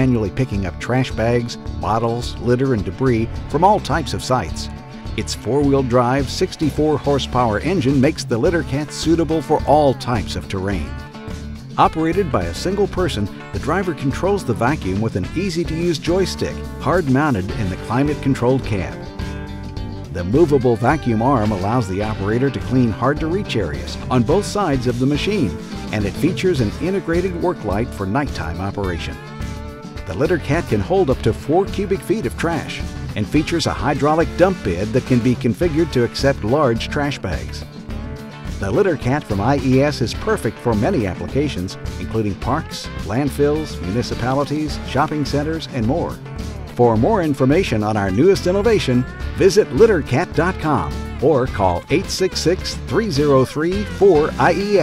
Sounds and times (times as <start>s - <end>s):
Speech: 0.0s - 11.0s, 11.8s - 19.1s, 20.1s - 29.2s, 30.0s - 37.7s, 38.6s - 46.2s, 46.8s - 54.8s
Music: 0.0s - 54.8s.